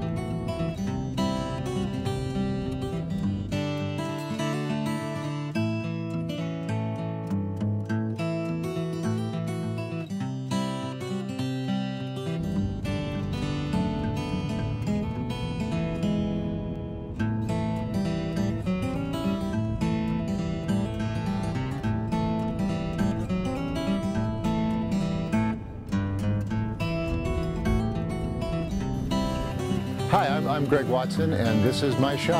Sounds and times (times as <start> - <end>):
Music: 0.0 - 32.3.